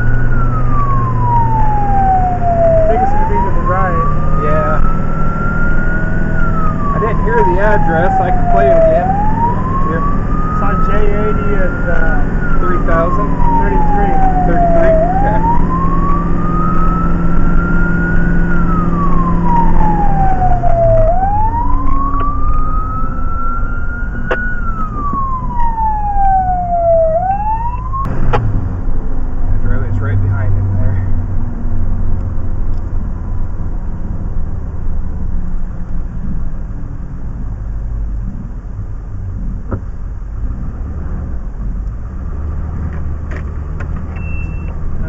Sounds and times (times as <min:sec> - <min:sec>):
Speech: 0:02.9 - 0:04.8, 0:06.9 - 0:09.1, 0:09.8 - 0:15.5, 0:29.6 - 0:31.1.